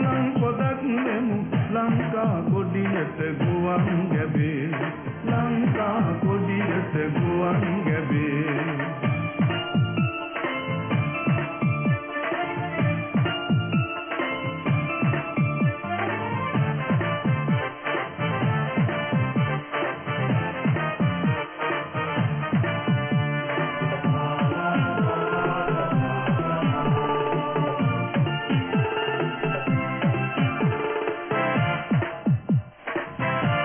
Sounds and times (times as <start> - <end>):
Background music: 0.0 - 33.6.